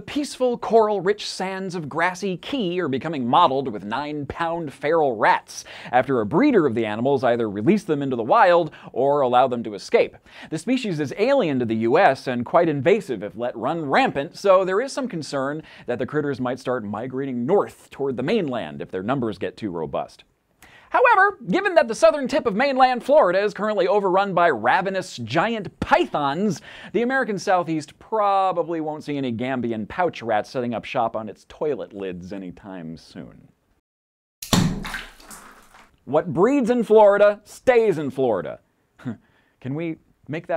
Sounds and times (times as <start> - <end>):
Speech: 0.0 - 20.3, 20.9 - 33.6, 36.0 - 40.5.